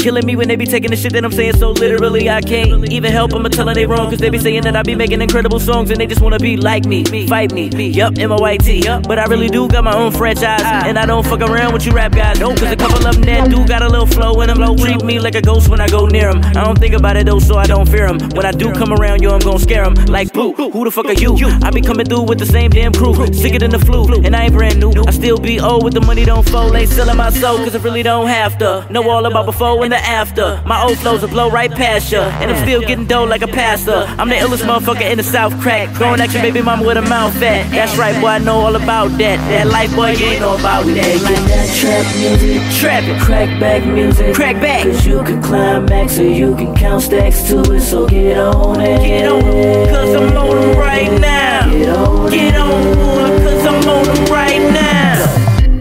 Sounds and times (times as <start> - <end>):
Music: 0.0 - 55.8.